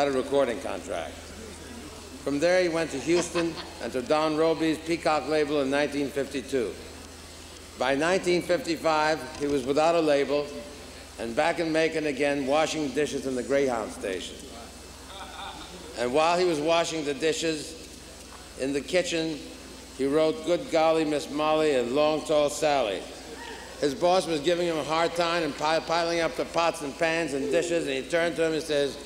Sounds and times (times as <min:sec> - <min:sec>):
Speech: 0:00.0 - 0:01.2, 0:02.2 - 0:06.8, 0:07.8 - 0:14.8, 0:16.0 - 0:17.8, 0:18.6 - 0:23.1, 0:23.8 - 0:29.0.